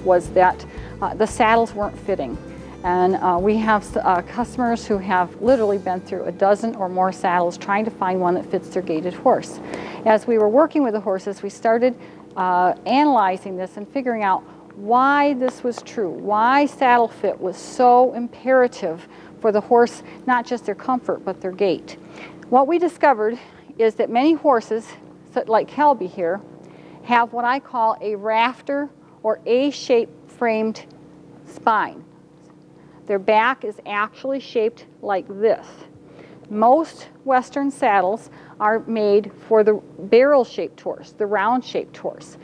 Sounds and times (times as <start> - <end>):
Music: 0.0 - 7.0
Speech: 0.0 - 26.4, 27.0 - 30.9, 31.5 - 32.0, 33.1 - 35.9, 36.5 - 42.4.